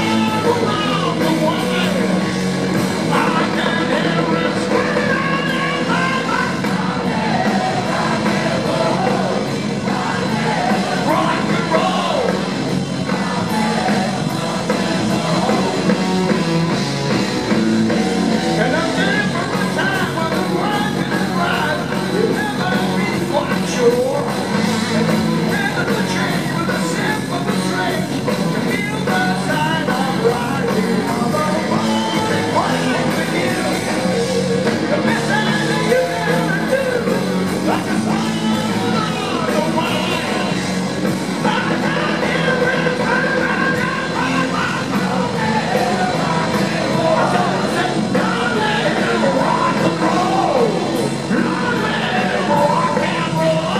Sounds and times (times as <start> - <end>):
Rock and roll: 0.0 - 53.7.